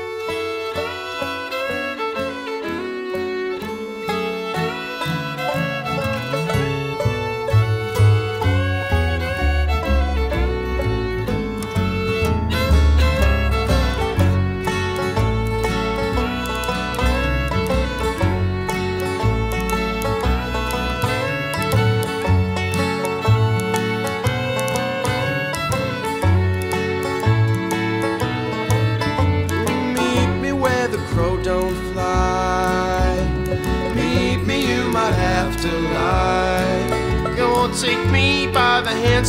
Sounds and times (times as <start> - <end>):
Music: 0.0 - 39.2.